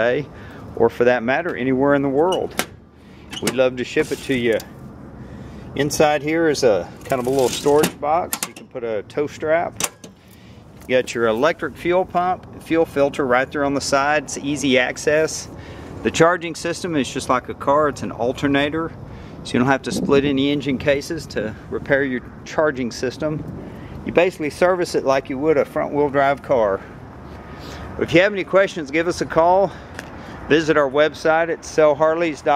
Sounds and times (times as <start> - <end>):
Speech: 0.0 - 2.6, 3.4 - 4.7, 5.8 - 9.8, 10.9 - 23.4, 24.1 - 26.9, 28.0 - 29.8, 30.5 - 32.5
Vehicle: 0.0 - 32.5.